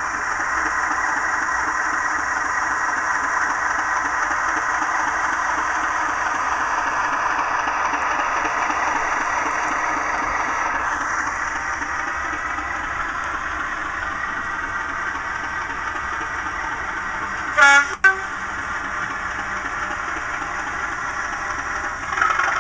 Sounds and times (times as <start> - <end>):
Train: 0.0 - 22.6
Air horn, truck horn: 17.5 - 18.4.